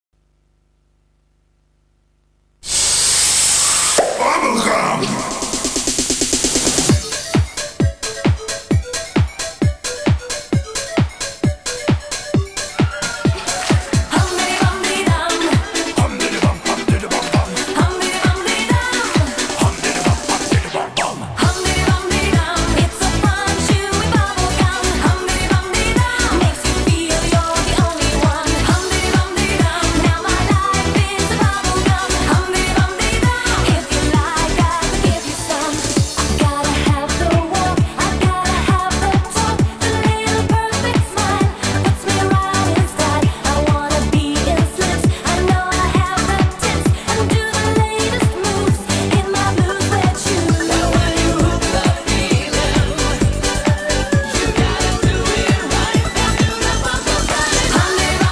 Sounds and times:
Techno: 0:02.7 - 0:58.3.

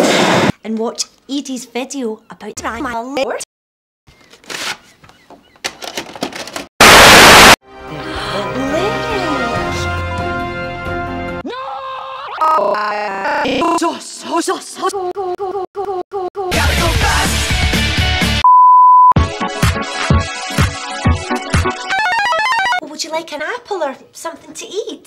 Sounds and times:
Speech: 0:00.6 - 0:03.5, 0:22.8 - 0:25.0
Music: 0:07.6 - 0:11.4, 0:16.5 - 0:18.4, 0:19.2 - 0:22.8.

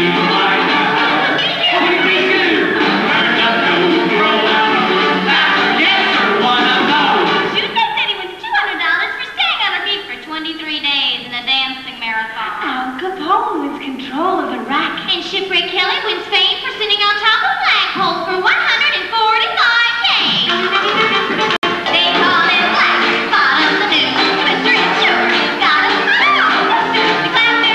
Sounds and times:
Speech: 0:07.6 - 0:20.5.

